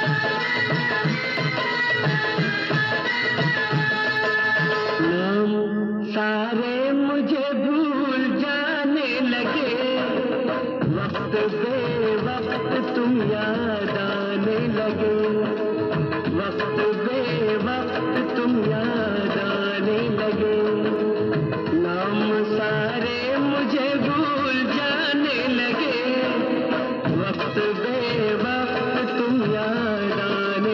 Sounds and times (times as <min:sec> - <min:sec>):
Music of Bollywood: 0:00.0 - 0:30.7
Singing: 0:05.0 - 0:15.6, 0:16.2 - 0:30.7.